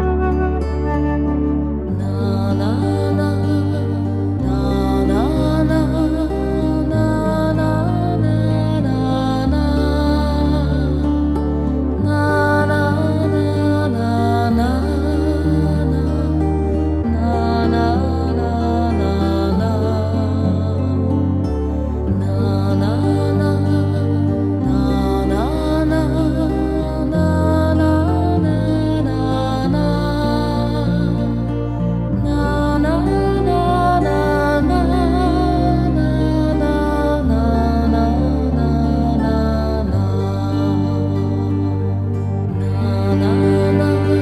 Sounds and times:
Music: 0:00.0 - 0:44.2.

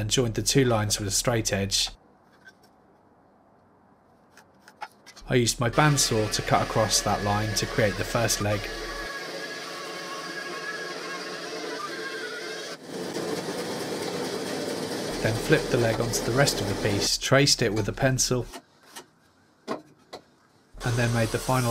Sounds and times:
Speech: 0:00.0 - 0:02.0, 0:05.2 - 0:08.8, 0:15.2 - 0:18.6, 0:20.8 - 0:21.7
Wood: 0:04.3 - 0:17.1.

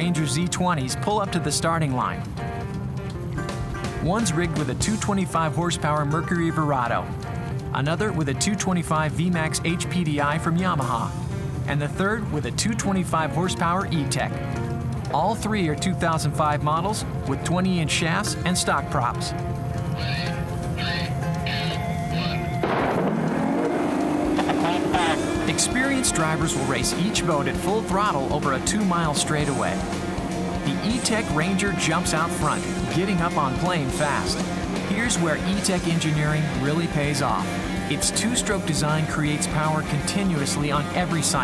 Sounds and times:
Speech: 0:00.0 - 0:02.2, 0:04.0 - 0:07.1, 0:07.7 - 0:11.1, 0:11.7 - 0:14.4, 0:15.1 - 0:19.4, 0:25.5 - 0:29.8, 0:30.6 - 0:41.4
Music: 0:00.0 - 0:41.4.

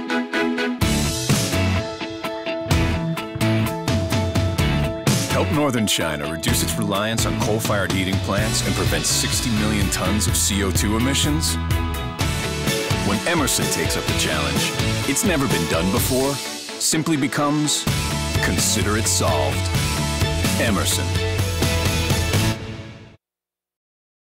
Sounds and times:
Music: 0:00.0 - 0:23.2
Speech: 0:05.3 - 0:11.6, 0:13.0 - 0:19.7, 0:20.4 - 0:21.2.

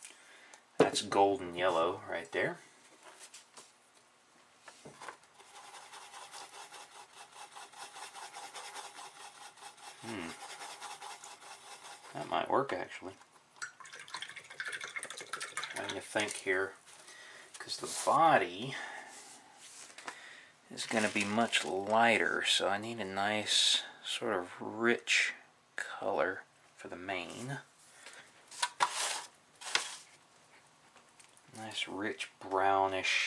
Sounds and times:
Water tap, faucet: 0:13.6 - 0:16.0.

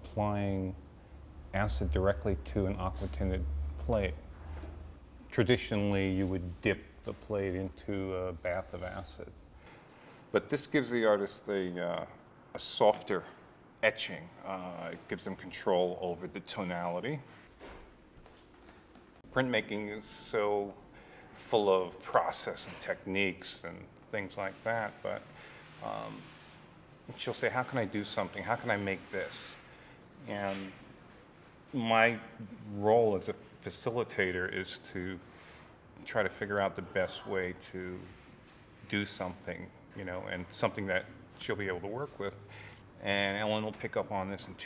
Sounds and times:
Speech: 0:00.0 - 0:00.8, 0:01.5 - 0:04.2, 0:05.3 - 0:09.4, 0:10.3 - 0:17.3, 0:19.3 - 0:20.8, 0:21.4 - 0:26.4, 0:27.1 - 0:29.6, 0:30.2 - 0:30.9, 0:31.7 - 0:35.3, 0:36.0 - 0:38.2, 0:38.8 - 0:44.6.

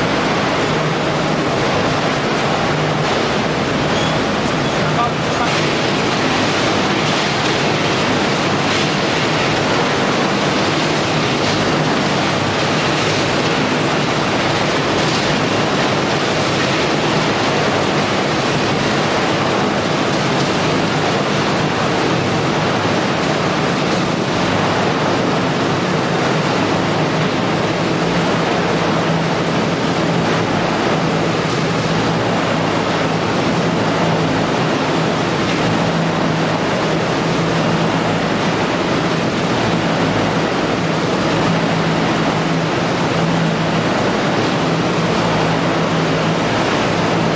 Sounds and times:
Speech: 0:04.7 - 0:05.7.

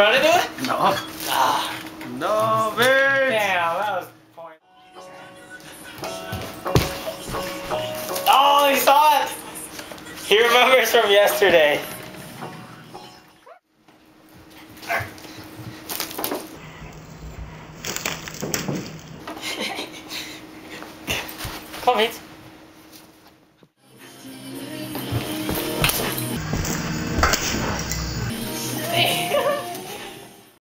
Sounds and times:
Music: 0:04.6 - 0:13.5, 0:23.8 - 0:30.6.

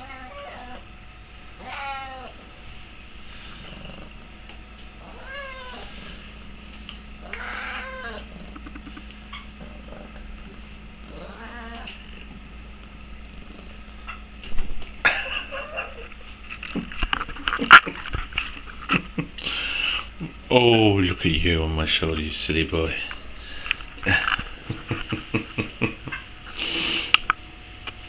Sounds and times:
Speech: 0:20.5 - 0:23.2.

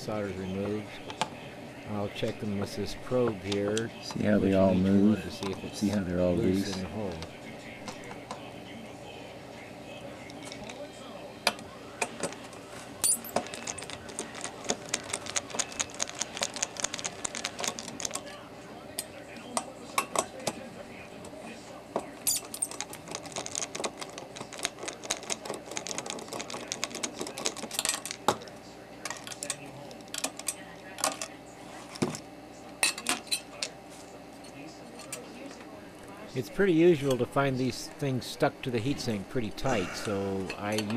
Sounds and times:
Speech: 0:00.0 - 0:12.0, 0:34.4 - 0:40.9.

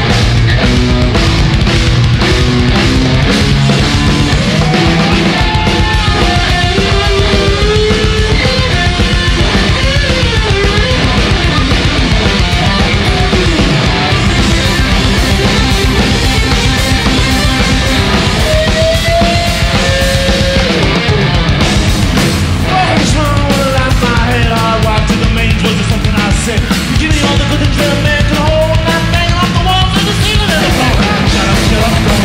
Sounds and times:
Heavy metal: 0:00.0 - 0:32.2
Punk rock: 0:00.0 - 0:32.2
Singing: 0:22.7 - 0:32.2.

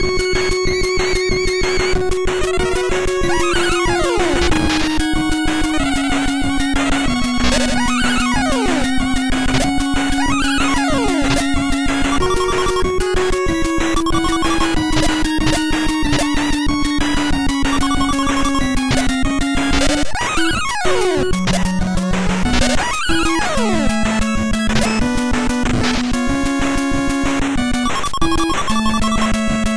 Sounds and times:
Music: 0:00.0 - 0:29.7.

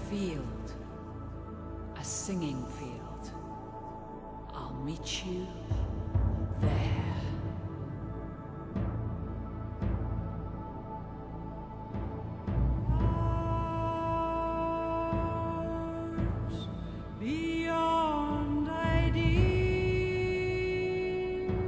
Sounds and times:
Music: 0:00.0 - 0:21.6
Male singing: 0:13.0 - 0:21.6.

